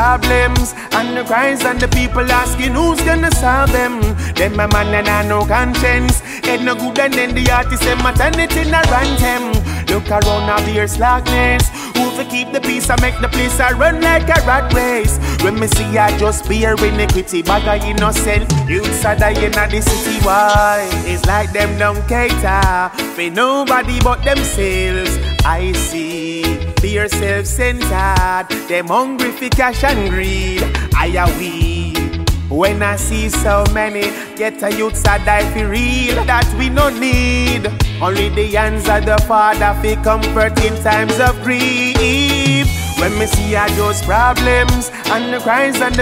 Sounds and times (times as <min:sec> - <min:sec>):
Music: 0:00.0 - 0:46.0.